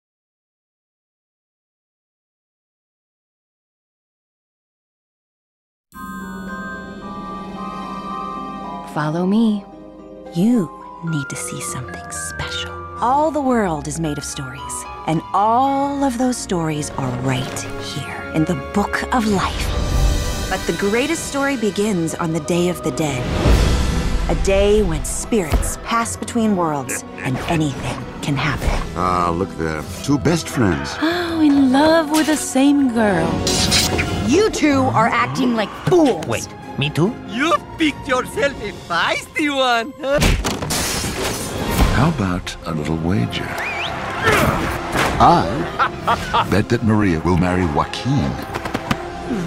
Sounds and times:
Music: 0:05.9 - 0:49.4.

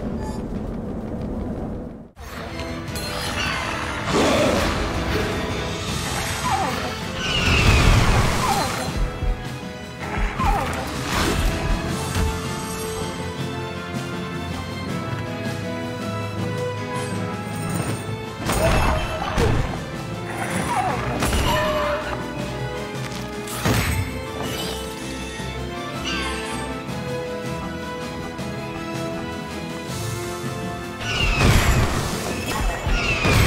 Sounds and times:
Music: 0:02.1 - 0:33.4.

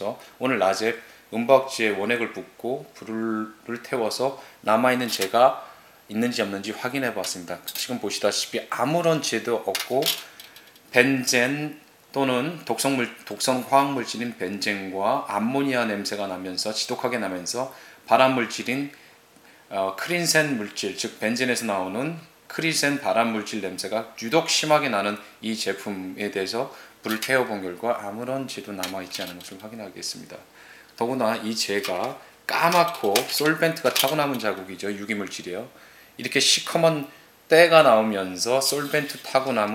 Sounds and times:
Speech: 0:00.0 - 0:10.3, 0:10.9 - 0:19.0, 0:19.7 - 0:39.7.

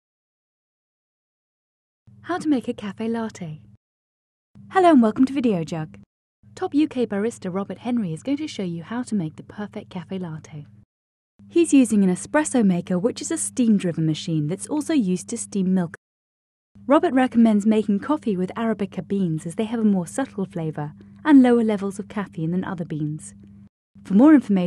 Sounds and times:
Speech: 0:02.2 - 0:03.6, 0:04.7 - 0:06.0, 0:06.6 - 0:10.7, 0:11.5 - 0:16.0, 0:16.9 - 0:23.4, 0:24.0 - 0:24.6.

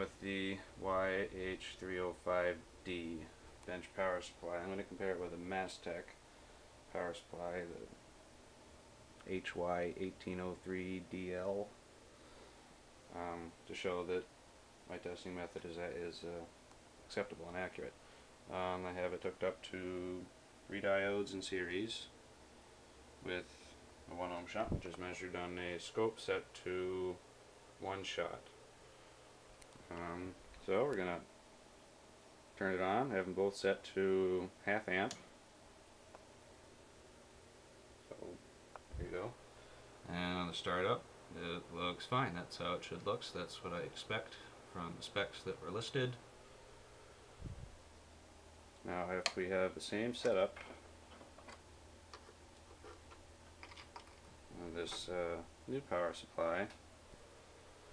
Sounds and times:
Speech: 0:00.0 - 0:06.2, 0:06.9 - 0:08.0, 0:09.2 - 0:11.8, 0:13.1 - 0:14.3, 0:14.9 - 0:22.2, 0:23.2 - 0:27.2, 0:27.8 - 0:28.6, 0:29.9 - 0:31.3, 0:32.6 - 0:35.3, 0:38.1 - 0:39.4, 0:40.0 - 0:46.2, 0:48.8 - 0:50.8, 0:54.5 - 0:56.8.

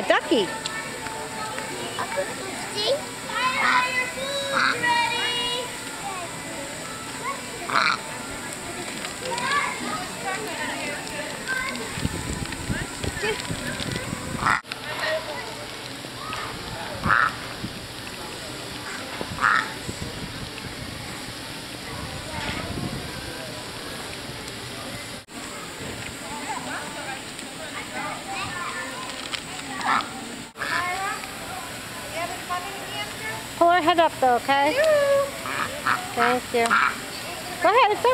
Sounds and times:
Quack: 0:04.6 - 0:04.8, 0:07.7 - 0:08.0, 0:14.4 - 0:14.6, 0:17.0 - 0:17.4, 0:19.4 - 0:19.7, 0:35.4 - 0:37.0.

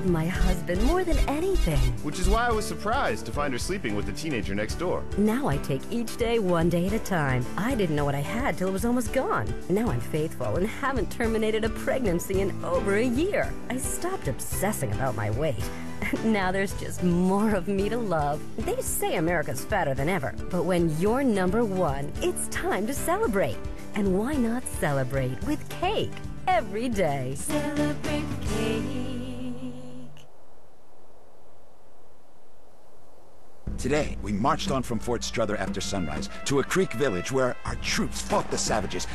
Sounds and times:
Speech: 0:00.0 - 0:27.5, 0:33.7 - 0:39.1
Music: 0:00.0 - 0:30.1, 0:33.7 - 0:39.1.

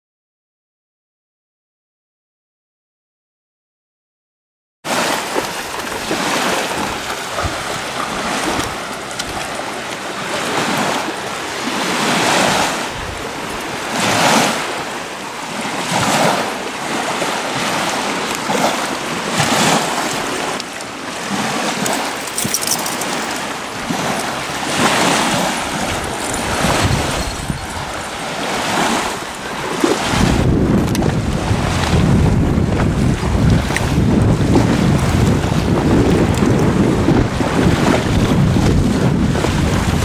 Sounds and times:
Stream: 0:04.9 - 0:40.0.

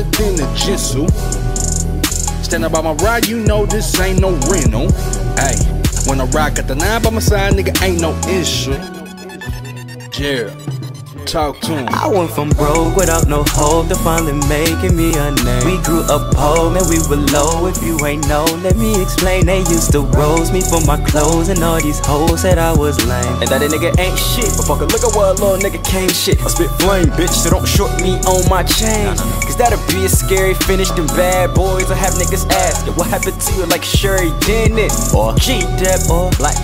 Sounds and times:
Music: 0:00.0 - 0:36.6.

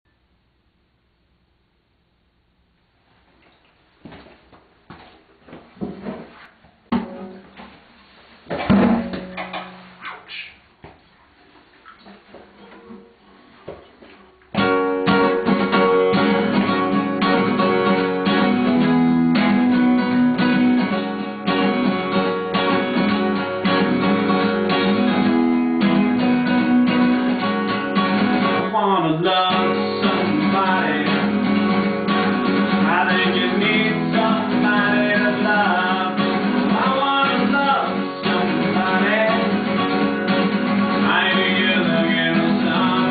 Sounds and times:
Acoustic guitar: 0:05.9 - 0:43.1.

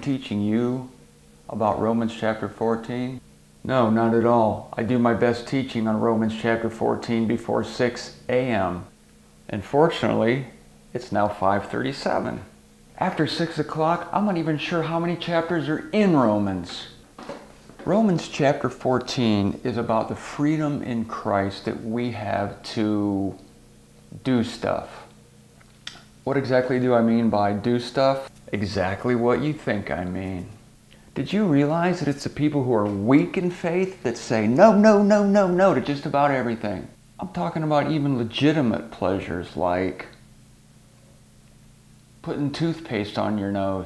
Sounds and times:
Speech: 0:00.0 - 0:08.9, 0:09.5 - 0:17.0, 0:17.8 - 0:23.5, 0:24.1 - 0:25.2, 0:26.2 - 0:30.6, 0:31.2 - 0:40.2, 0:42.2 - 0:43.8.

